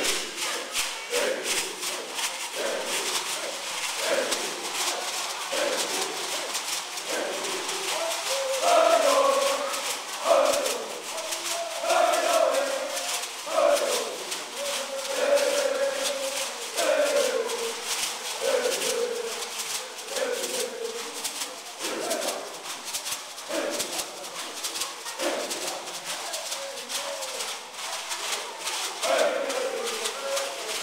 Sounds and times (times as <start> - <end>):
Speech: 0.0 - 30.8.